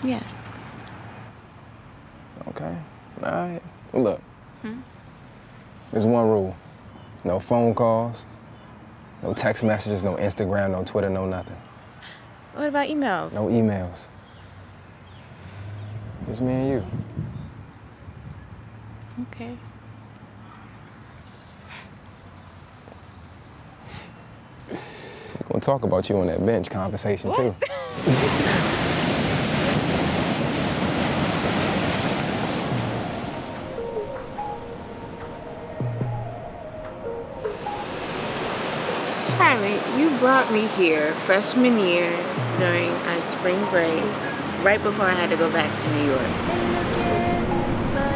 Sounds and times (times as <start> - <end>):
Wind: 0.0 - 48.1
Waves, surf: 27.3 - 35.3, 37.5 - 48.1.